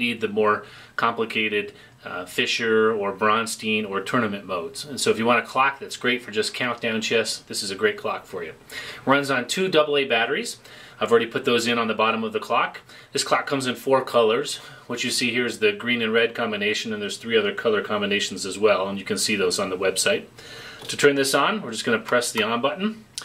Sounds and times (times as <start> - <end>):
Speech: 0.0 - 23.2.